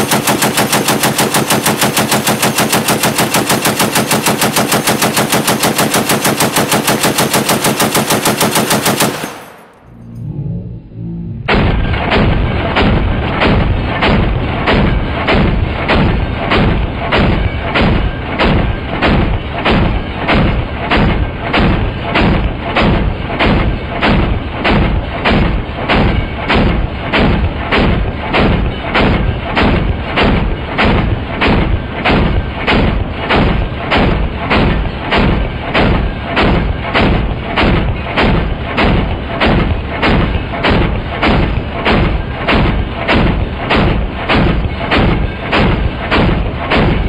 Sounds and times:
Machine gun: 0.0s - 9.9s, 11.8s - 47.0s.

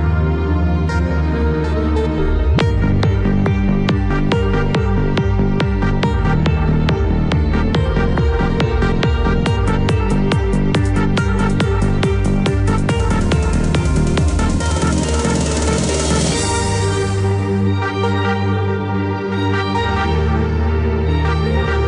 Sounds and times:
Music: 0.0s - 21.8s.

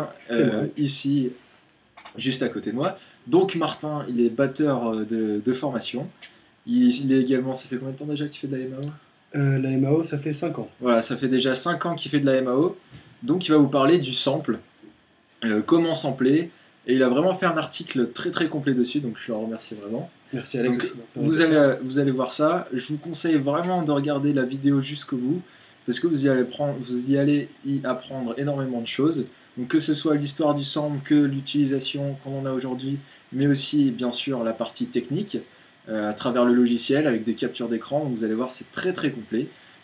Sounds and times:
Speech: 0.0s - 1.4s, 2.0s - 14.7s, 15.4s - 39.6s.

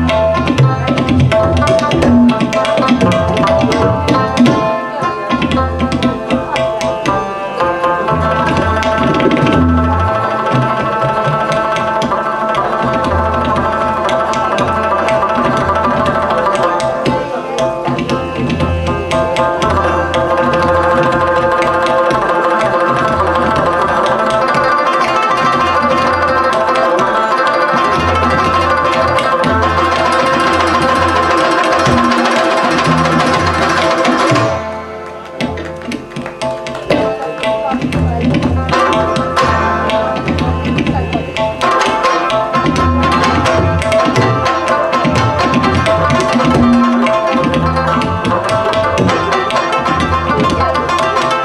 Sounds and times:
Tabla: 0.0s - 51.4s
Speech: 4.0s - 9.6s, 16.1s - 20.7s, 36.6s - 42.0s, 48.4s - 51.4s.

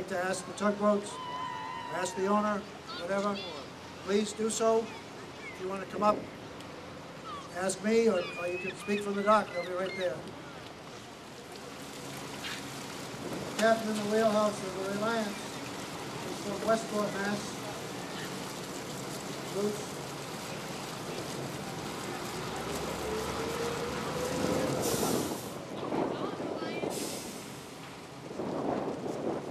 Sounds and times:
Ship: 0.0s - 23.0s, 23.9s - 29.5s.

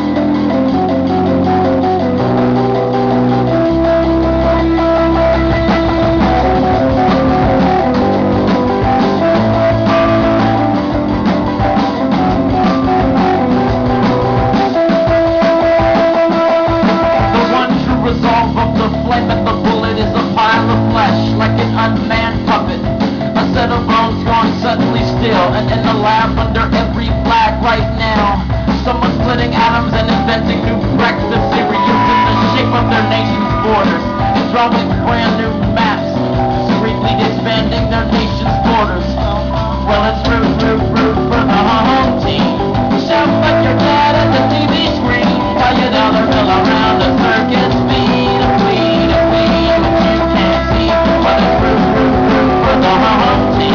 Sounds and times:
Music: 0.0s - 53.7s.

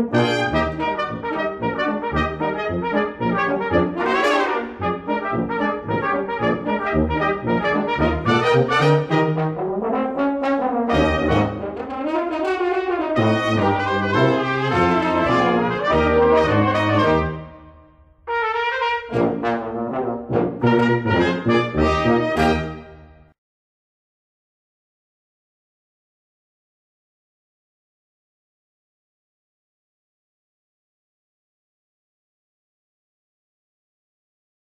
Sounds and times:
Trombone: 0.0s - 17.7s, 18.3s - 23.1s
French horn: 0.0s - 23.3s
Trumpet: 0.0s - 23.3s.

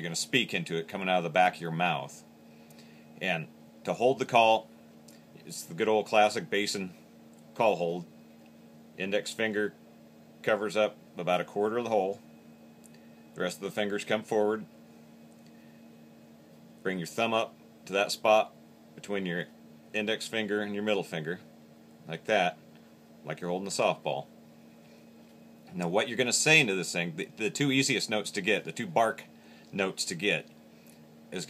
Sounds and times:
Speech: 0.0s - 2.3s, 3.2s - 4.7s, 5.4s - 7.0s, 7.6s - 8.1s, 9.0s - 9.8s, 10.4s - 12.2s, 13.4s - 14.7s, 16.8s - 22.6s, 23.2s - 24.3s, 25.7s - 30.5s.

